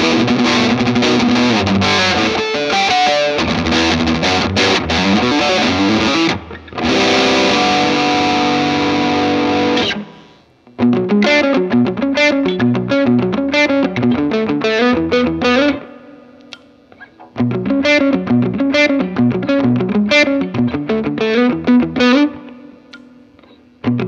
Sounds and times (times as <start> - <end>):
Bass guitar: 0.0 - 16.1, 17.3 - 22.9, 23.8 - 24.0
Electric guitar: 0.0 - 24.0.